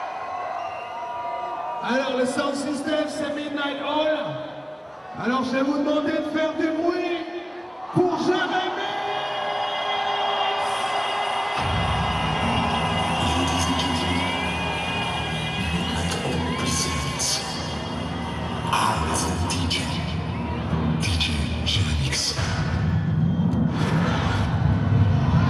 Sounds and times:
Speech: 1.8 - 4.5, 5.2 - 7.4, 13.1 - 14.4, 15.6 - 17.7, 18.8 - 20.2, 21.0 - 22.6
Music: 9.6 - 25.4.

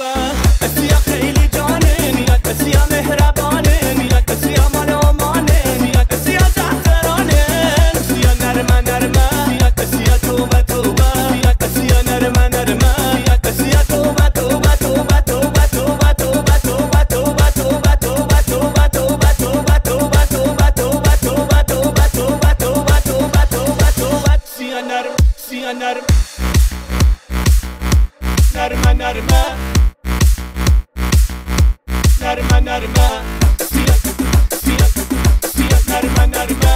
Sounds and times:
Music: 0.0 - 36.7.

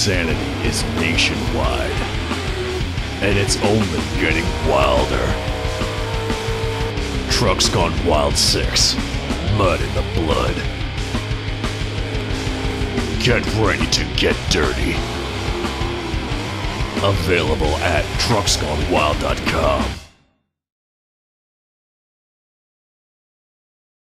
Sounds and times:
Speech: 0.0 - 2.1, 3.2 - 5.4, 7.3 - 10.7, 13.1 - 15.0, 17.0 - 20.0
Music: 0.0 - 20.6.

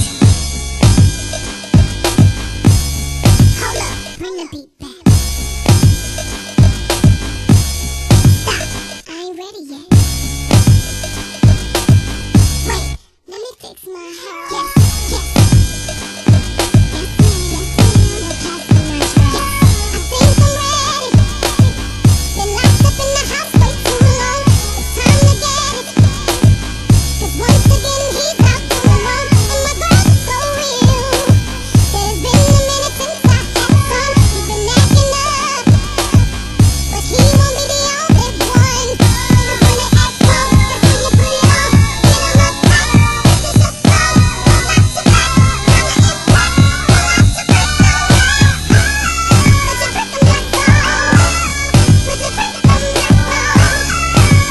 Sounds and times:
Music: 0.0 - 13.2, 14.0 - 54.5.

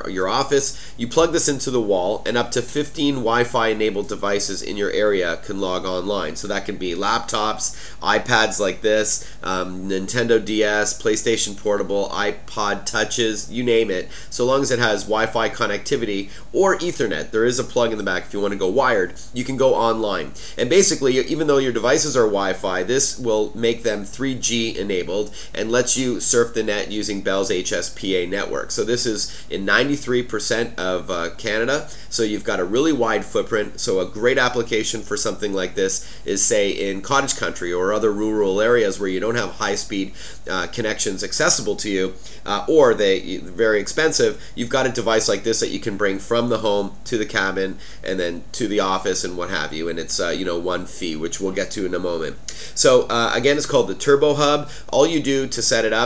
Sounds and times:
Speech: 0.0 - 56.0.

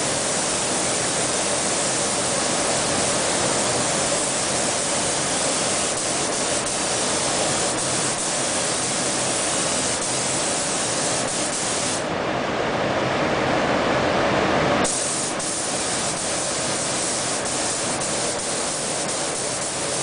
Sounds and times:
Spray: 0.0 - 12.1, 14.8 - 20.0.

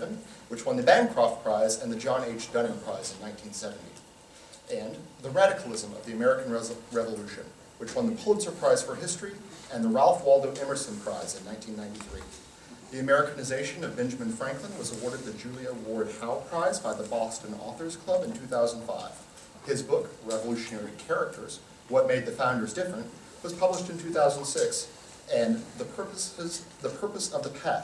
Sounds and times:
Speech: 0.0 - 4.1, 4.7 - 27.8.

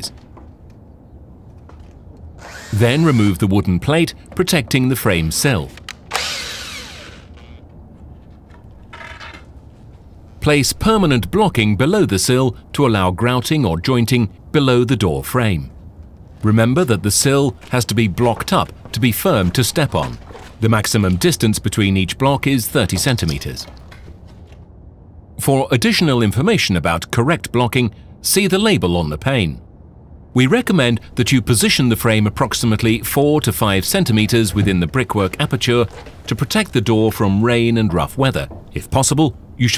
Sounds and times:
Speech: 0.0 - 0.2, 2.7 - 5.8, 10.4 - 15.8, 16.4 - 23.7, 25.4 - 29.6, 30.4 - 39.7.

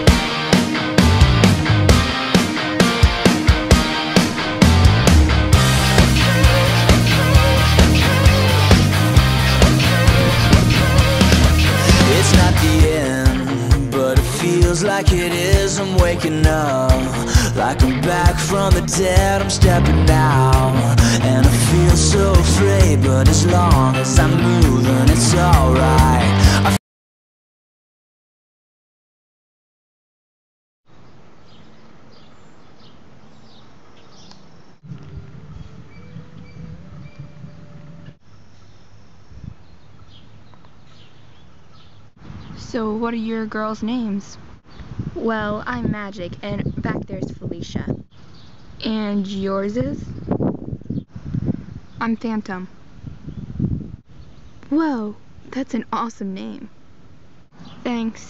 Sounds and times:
Rustling leaves: 30.9 - 45.3.

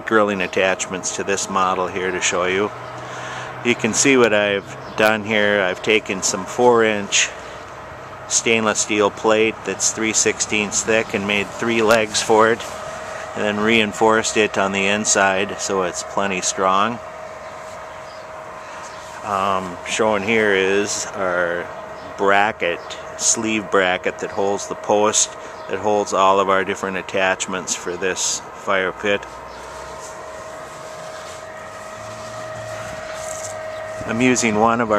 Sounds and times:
Speech: 0.0 - 2.7, 3.6 - 7.4, 8.3 - 17.0, 19.2 - 29.3, 34.0 - 34.9.

